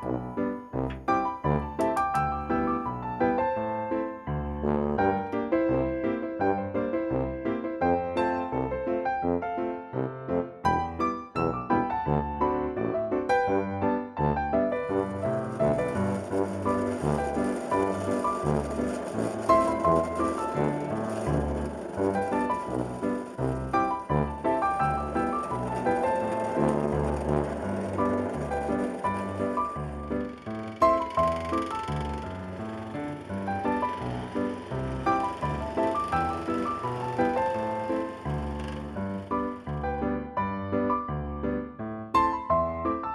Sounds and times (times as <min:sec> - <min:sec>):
Music: 0:00.0 - 0:43.1.